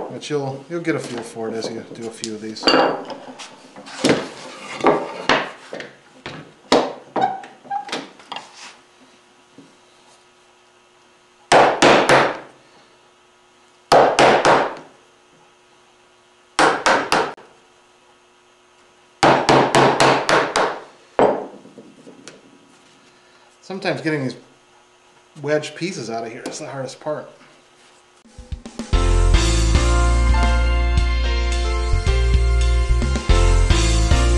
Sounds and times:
Speech: 0.1s - 2.7s, 23.6s - 24.5s, 25.4s - 27.4s.

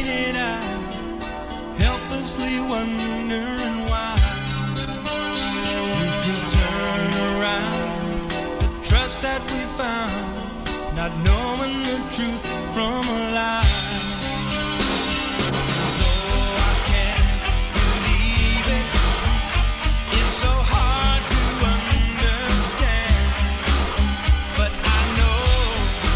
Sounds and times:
Male singing: 0.0s - 0.9s, 1.8s - 4.4s, 6.0s - 8.0s, 8.8s - 14.2s, 16.0s - 23.4s, 24.5s - 26.1s
Music: 0.0s - 26.1s.

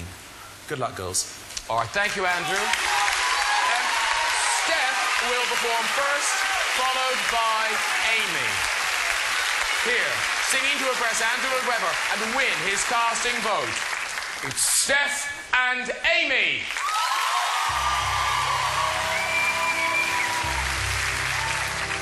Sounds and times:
Speech: 0.0s - 2.8s, 9.9s - 13.8s, 14.4s - 16.7s.

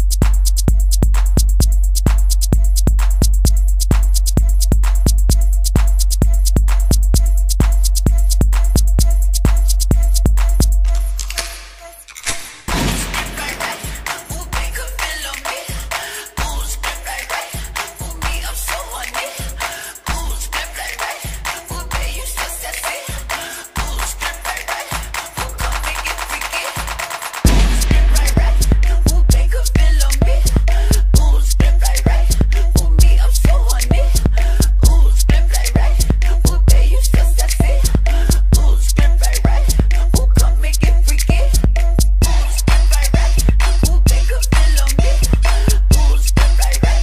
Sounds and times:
Music: 0.0s - 47.0s.

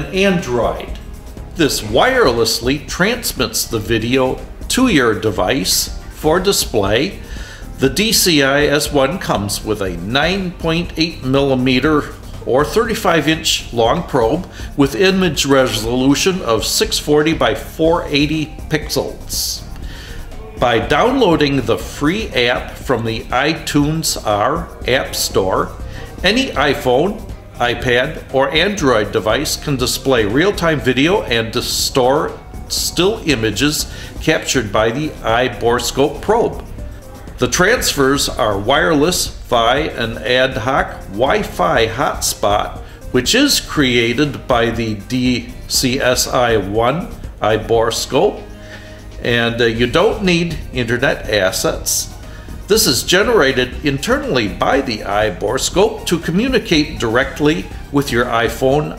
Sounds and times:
Speech: 0.0s - 1.0s, 1.6s - 7.2s, 7.8s - 19.7s, 20.6s - 36.7s, 37.4s - 48.4s, 49.2s - 58.9s
Music: 0.0s - 58.9s.

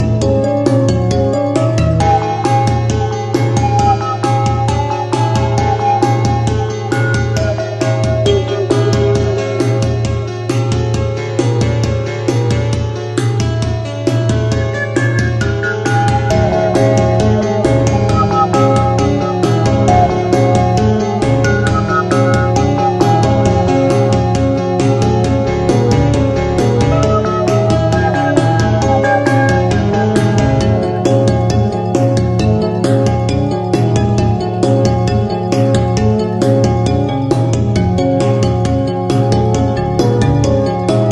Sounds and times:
Music: 0.0s - 41.1s.

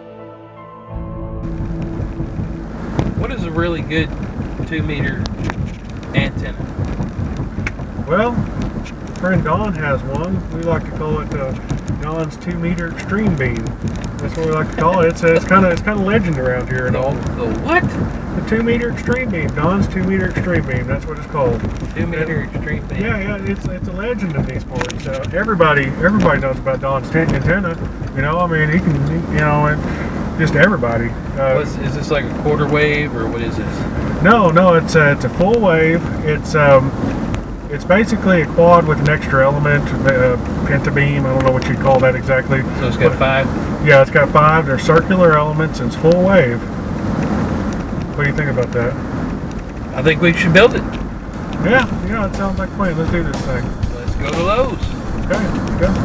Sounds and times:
Vehicle: 0.9s - 56.0s
Speech: 3.2s - 4.1s, 4.7s - 5.3s, 6.1s - 6.6s, 8.1s - 8.5s, 9.2s - 37.0s, 37.7s - 46.7s, 48.2s - 49.0s, 49.9s - 50.9s, 51.5s - 56.0s.

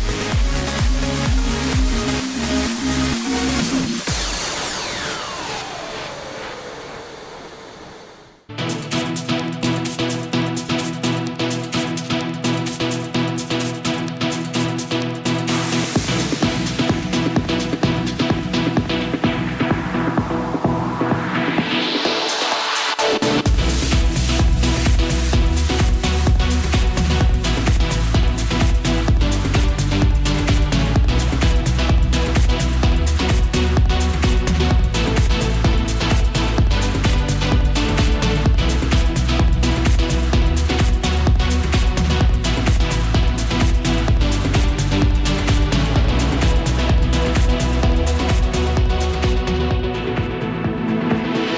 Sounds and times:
Music: 0.0s - 51.5s.

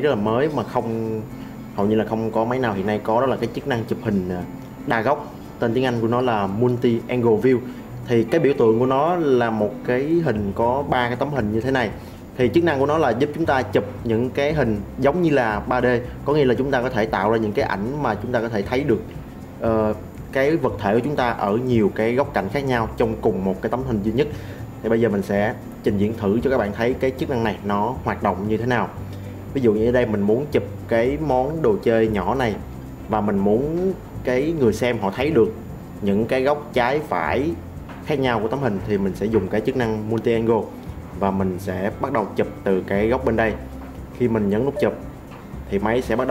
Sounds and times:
Speech: 0.0s - 45.0s, 45.7s - 46.3s
Music: 0.0s - 46.3s.

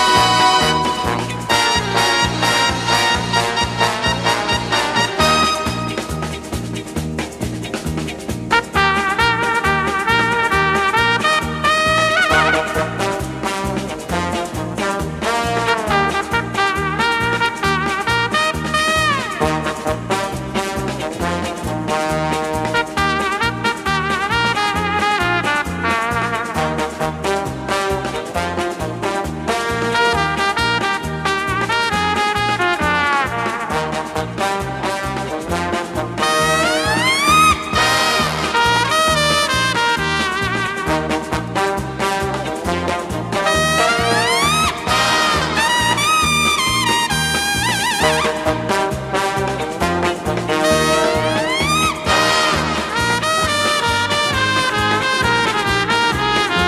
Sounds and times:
Music: 0.0s - 56.6s.

